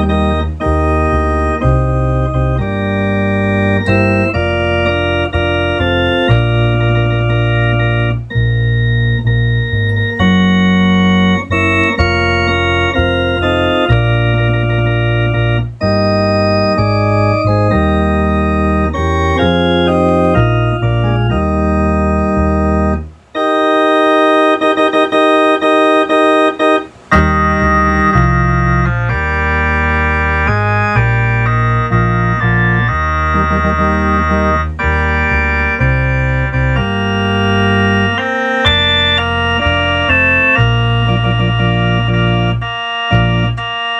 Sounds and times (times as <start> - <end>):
Hammond organ: 0.0 - 43.9.